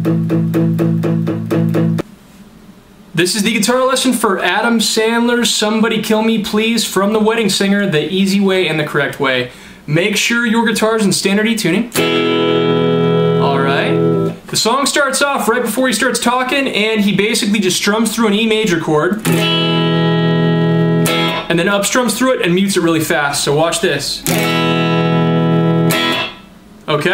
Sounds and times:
Guitar: 0:00.0 - 0:02.1, 0:03.3 - 0:27.1
Speech: 0:03.2 - 0:12.0, 0:13.4 - 0:19.2, 0:21.5 - 0:24.3, 0:26.9 - 0:27.1.

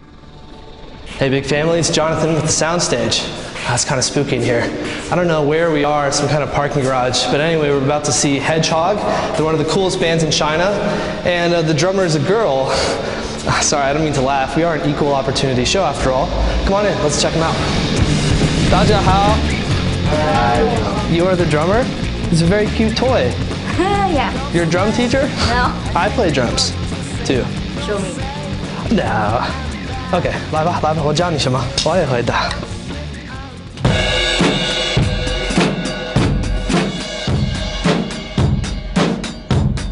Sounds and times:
Music: 0:00.0 - 0:39.9
Speech: 0:01.2 - 0:17.6, 0:20.1 - 0:28.2, 0:28.9 - 0:32.6.

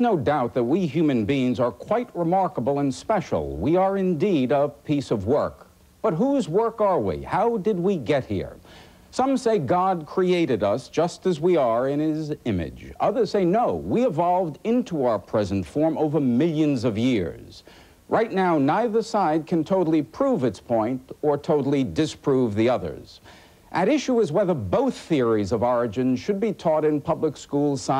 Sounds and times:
Speech: 0:00.0 - 0:27.9.

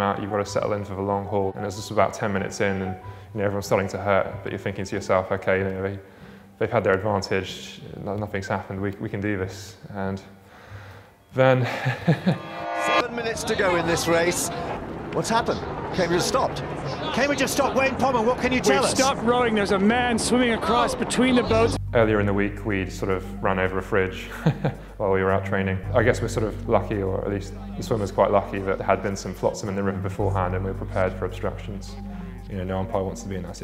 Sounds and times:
Speech: 0:00.0 - 0:06.0, 0:06.6 - 0:10.3, 0:13.0 - 0:14.6, 0:15.2 - 0:24.3, 0:25.0 - 0:33.6
Music: 0:00.0 - 0:33.6.

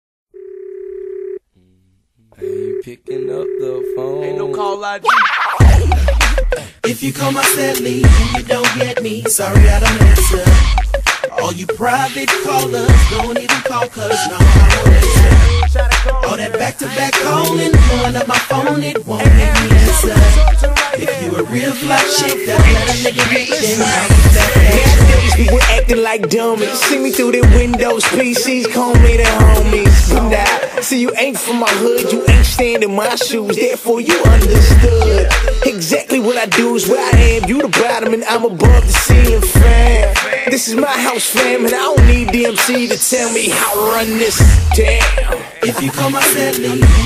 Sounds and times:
Speech: 0:01.6 - 0:05.2
Music: 0:05.6 - 0:47.0.

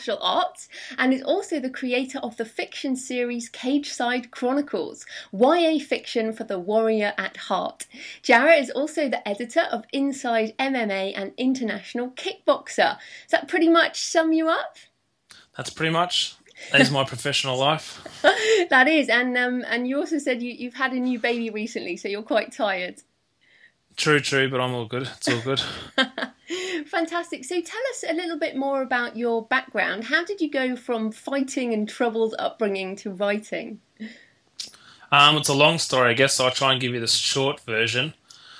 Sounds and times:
Speech: 0:00.0 - 0:14.8, 0:15.4 - 0:23.0, 0:24.0 - 0:25.9, 0:26.8 - 0:33.8, 0:34.6 - 0:38.2.

